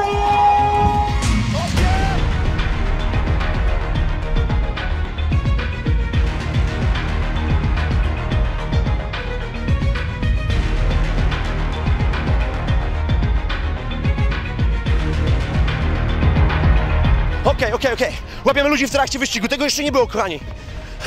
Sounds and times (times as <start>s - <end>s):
Music: 0.0s - 21.0s
Speech: 17.4s - 20.5s.